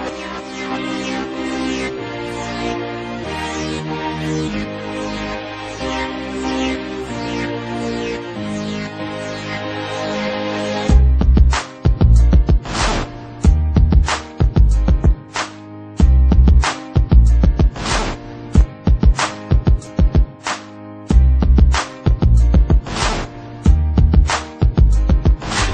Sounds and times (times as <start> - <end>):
Music: 0.0 - 25.7.